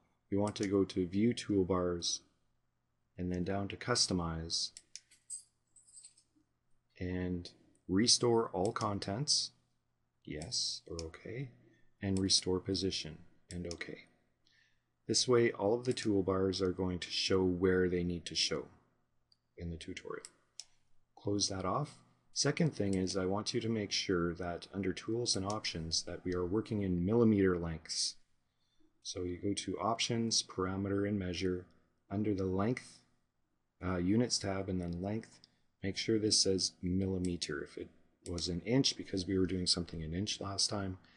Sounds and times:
Speech: 0:00.3 - 0:02.3, 0:03.2 - 0:04.8, 0:07.0 - 0:09.6, 0:10.3 - 0:14.1, 0:15.1 - 0:18.8, 0:19.6 - 0:20.4, 0:21.2 - 0:28.3, 0:29.0 - 0:33.1, 0:33.8 - 0:41.1.

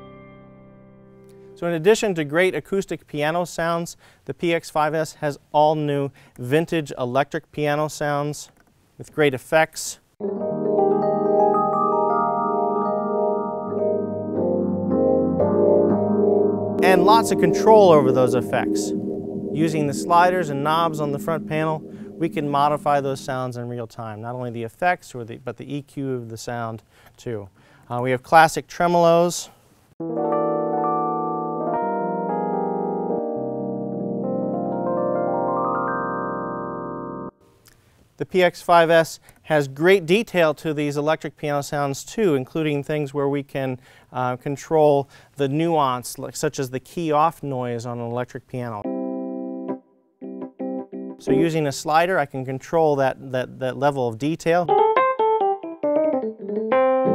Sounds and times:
Electric piano: 0:00.0 - 0:01.6, 0:10.2 - 0:23.6, 0:30.0 - 0:37.4, 0:48.8 - 0:51.8, 0:54.7 - 0:57.1.

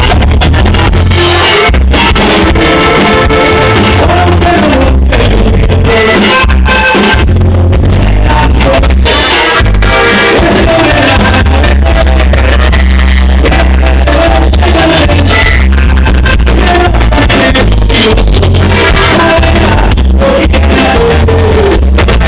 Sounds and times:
Music: 0:00.0 - 0:22.2.

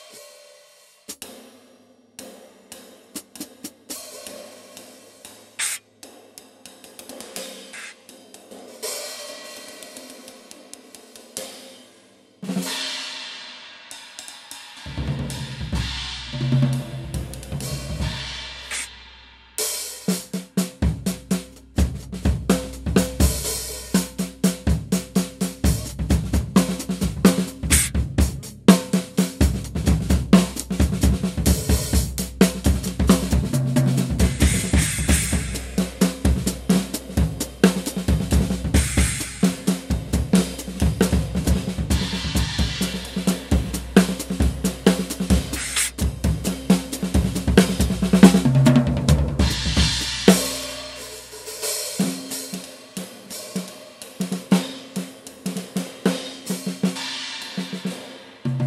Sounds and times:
Hi-hat: 0:03.1 - 0:08.9, 0:17.3 - 0:20.4, 0:21.0 - 0:48.4.

